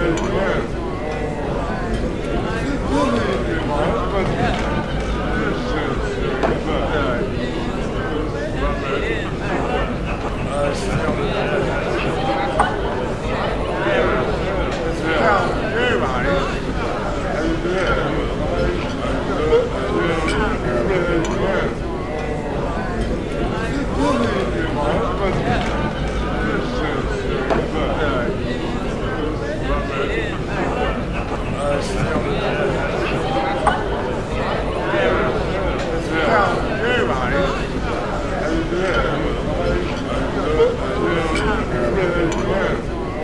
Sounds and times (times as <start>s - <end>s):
Crowd: 0.0s - 43.2s.